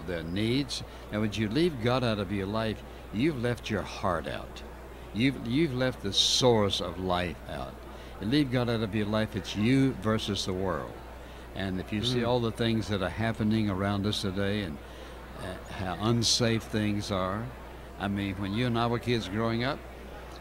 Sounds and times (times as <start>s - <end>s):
Speech: 0.0s - 20.4s.